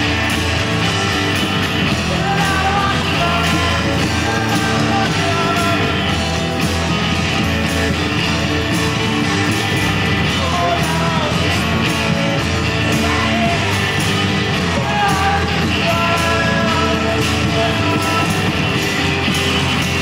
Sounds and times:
Music: 0:00.0 - 0:20.0.

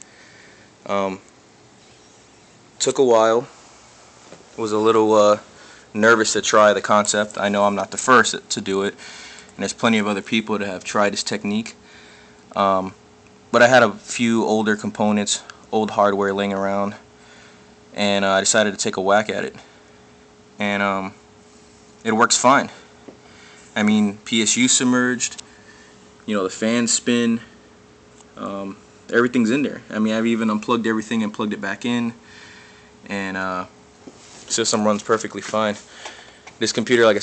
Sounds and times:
Speech: 0:00.8 - 0:01.2, 0:02.8 - 0:03.5, 0:04.6 - 0:09.0, 0:09.6 - 0:11.8, 0:12.5 - 0:17.1, 0:17.9 - 0:19.7, 0:20.6 - 0:21.2, 0:22.0 - 0:22.8, 0:23.8 - 0:25.4, 0:26.3 - 0:27.5, 0:28.4 - 0:32.2, 0:33.0 - 0:33.8, 0:34.5 - 0:35.9, 0:36.6 - 0:37.2.

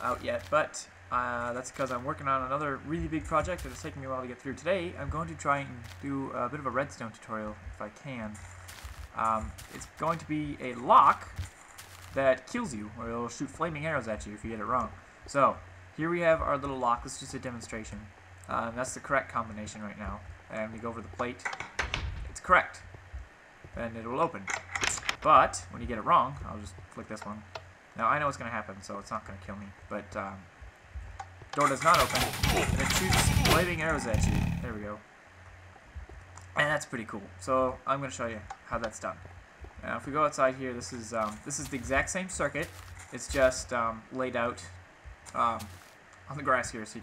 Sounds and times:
Speech: 0:00.0 - 0:08.4, 0:09.2 - 0:11.4, 0:12.2 - 0:21.5, 0:22.3 - 0:22.9, 0:23.7 - 0:30.5, 0:31.6 - 0:35.1, 0:36.5 - 0:45.7, 0:46.3 - 0:47.0.

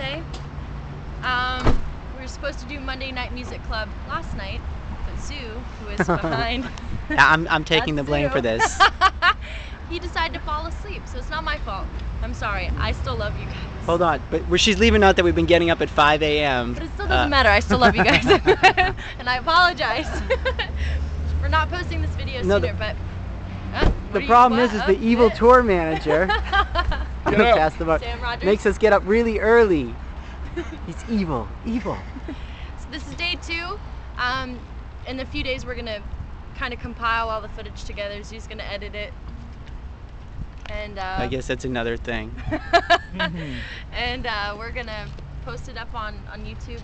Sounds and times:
Speech: 0:05.2 - 0:08.8, 0:21.4 - 0:23.0, 0:23.8 - 0:26.3, 0:27.3 - 0:28.6, 0:40.7 - 0:42.4.

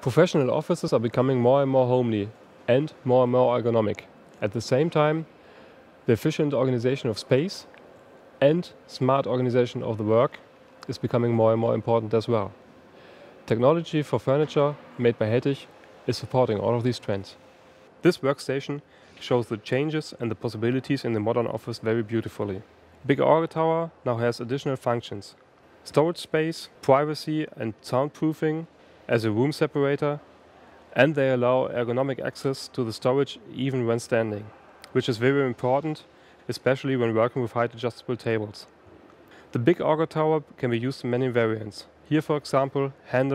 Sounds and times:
Speech: 0:00.0 - 0:05.3, 0:06.0 - 0:07.7, 0:08.4 - 0:12.6, 0:13.5 - 0:17.4, 0:18.0 - 0:30.2, 0:30.9 - 0:38.7, 0:39.5 - 0:43.3.

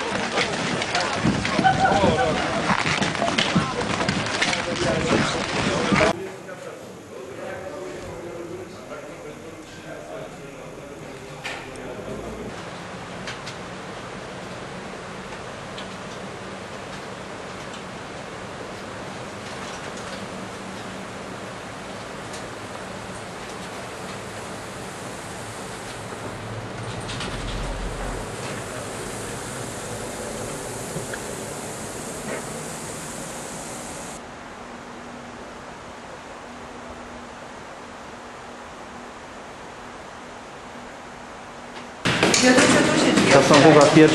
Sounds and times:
Speech: 0:00.0 - 0:12.6, 0:42.4 - 0:44.1.

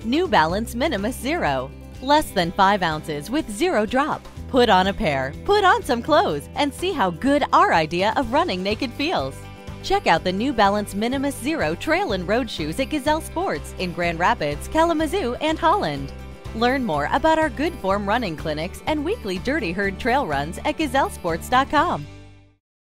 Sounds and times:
Speech: 0:00.0 - 0:22.1
Music: 0:00.0 - 0:22.6.

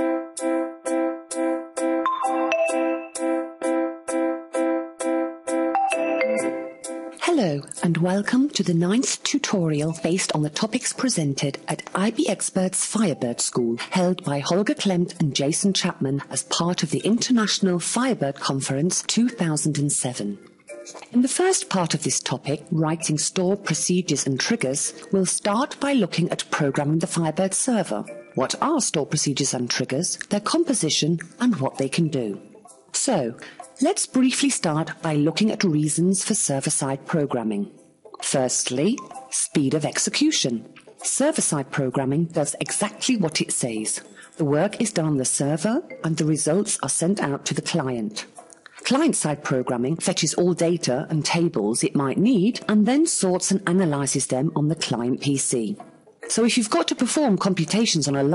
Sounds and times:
Music: 0:00.0 - 0:58.3
Speech: 0:07.2 - 0:20.4, 0:21.1 - 0:32.4, 0:33.0 - 0:58.3.

